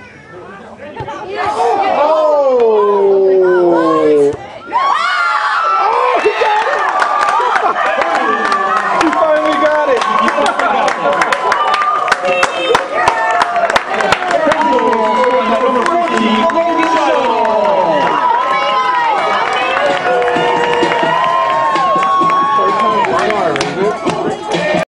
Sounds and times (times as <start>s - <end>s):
Music: 19.4s - 24.8s.